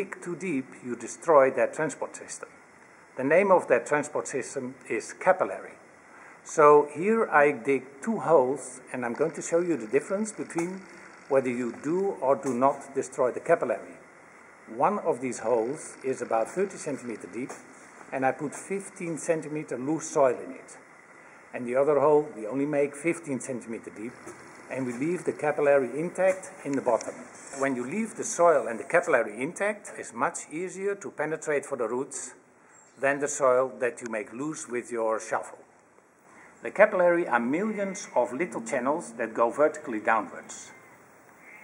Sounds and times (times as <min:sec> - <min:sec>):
Speech: 0:00.0 - 0:02.6, 0:03.2 - 0:05.8, 0:06.4 - 0:14.0, 0:14.7 - 0:20.8, 0:21.5 - 0:32.4, 0:33.0 - 0:35.7, 0:36.6 - 0:40.7.